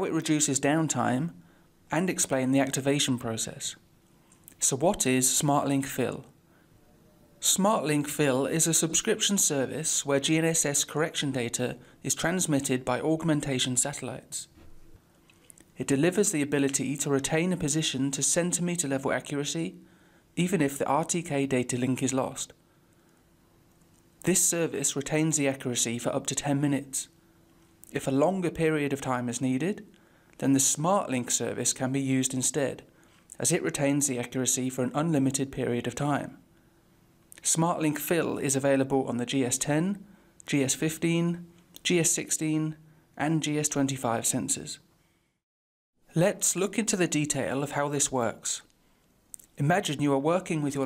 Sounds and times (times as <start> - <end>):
Speech: 0.0 - 3.8, 4.6 - 6.4, 7.4 - 14.6, 15.8 - 19.8, 20.4 - 22.6, 24.2 - 27.2, 27.9 - 36.4, 37.4 - 44.9, 46.1 - 48.7, 49.4 - 50.8.